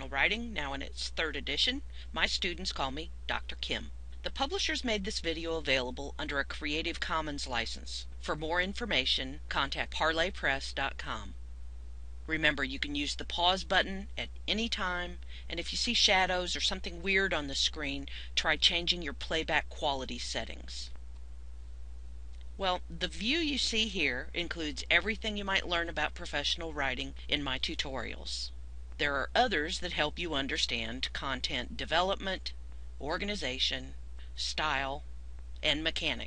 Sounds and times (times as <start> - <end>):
Speech: 0.0 - 11.4, 12.3 - 20.9, 22.6 - 35.0, 35.6 - 36.2.